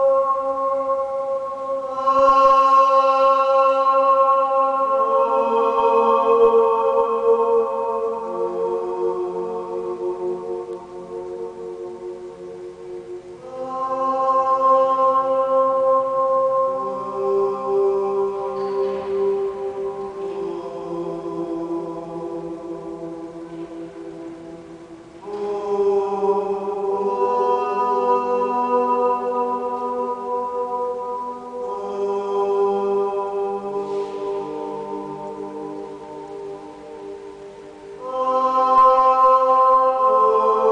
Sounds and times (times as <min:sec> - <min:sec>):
Mantra: 0:00.0 - 0:40.7.